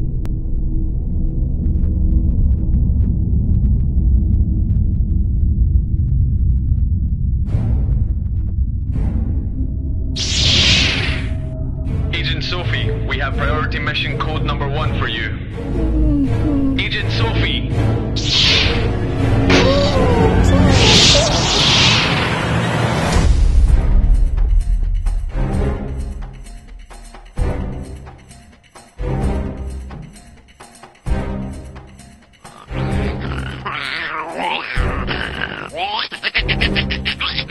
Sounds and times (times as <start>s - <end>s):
Music: 6.7s - 37.5s.